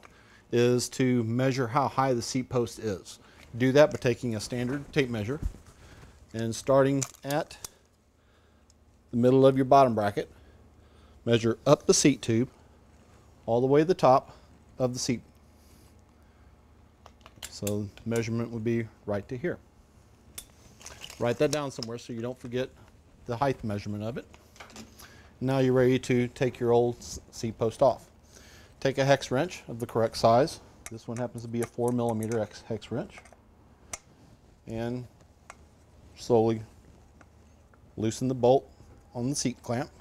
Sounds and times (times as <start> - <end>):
Speech: 0.5 - 5.5, 6.3 - 7.6, 9.1 - 10.3, 11.3 - 12.6, 13.5 - 15.3, 17.5 - 19.6, 21.2 - 24.3, 25.4 - 28.1, 28.8 - 33.2, 34.7 - 35.1, 36.2 - 36.7, 38.0 - 40.0.